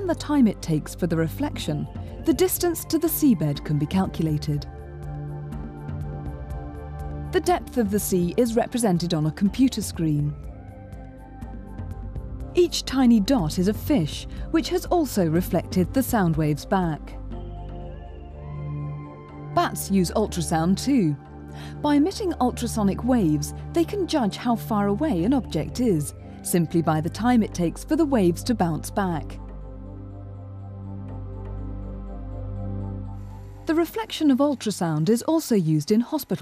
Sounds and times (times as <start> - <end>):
Speech: 0.0 - 4.7, 7.4 - 10.4, 12.6 - 17.2, 19.6 - 21.2, 21.8 - 29.4, 33.7 - 36.4
Music: 0.0 - 36.4.